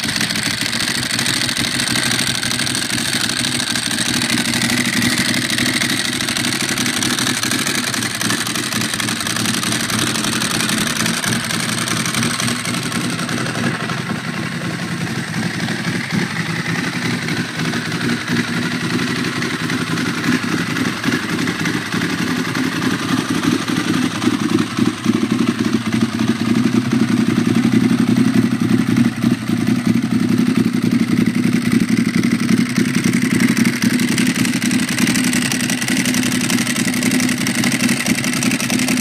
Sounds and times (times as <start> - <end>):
Idling: 0.0 - 39.0
Medium engine (mid frequency): 0.0 - 39.0
Vehicle: 0.0 - 39.0.